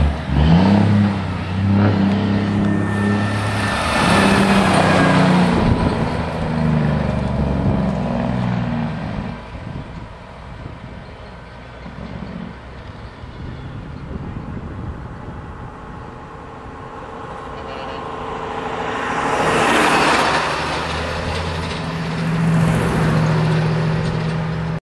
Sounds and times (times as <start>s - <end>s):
Truck: 0.0s - 24.8s.